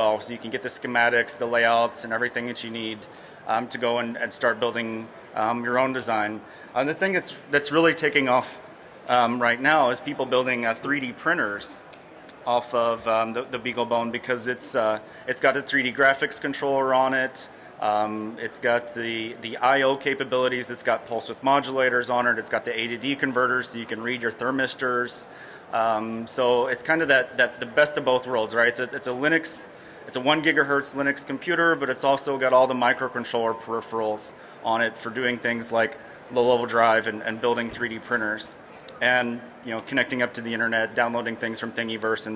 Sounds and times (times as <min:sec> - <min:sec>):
Speech: 0:00.0 - 0:42.3.